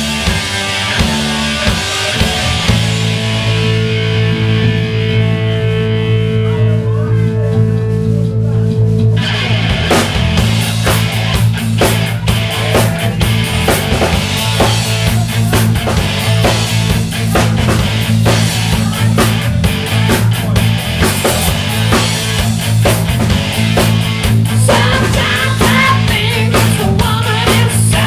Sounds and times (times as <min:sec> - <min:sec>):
Progressive rock: 0:00.0 - 0:28.0
Dance music: 0:10.5 - 0:22.9, 0:24.4 - 0:28.0
Speech: 0:10.8 - 0:22.6.